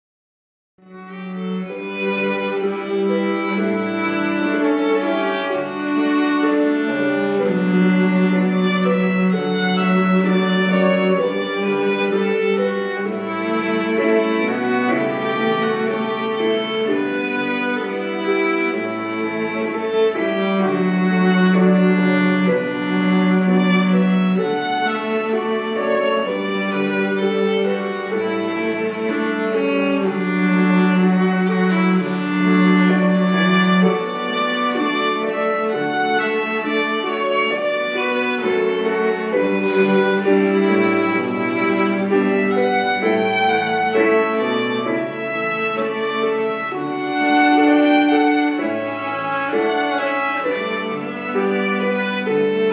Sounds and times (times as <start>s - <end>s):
Cello: 0.8s - 52.7s
Violin, fiddle: 0.8s - 52.7s.